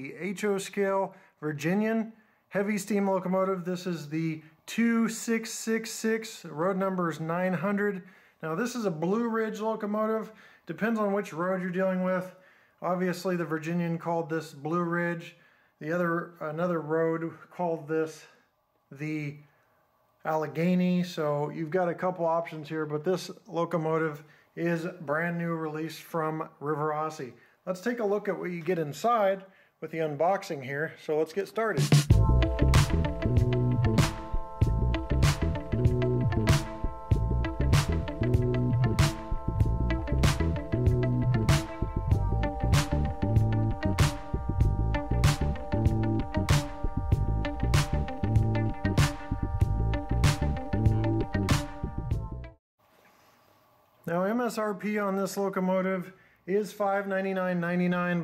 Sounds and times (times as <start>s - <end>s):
Speech: 0.0s - 19.4s, 20.2s - 31.9s, 54.0s - 58.2s.